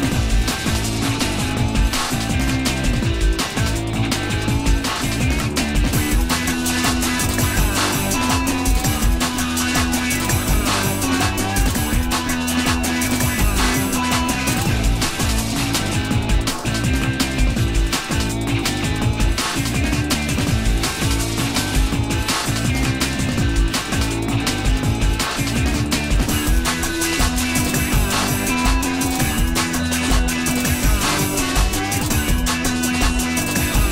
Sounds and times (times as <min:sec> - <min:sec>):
Theme music: 0:00.0 - 0:25.2.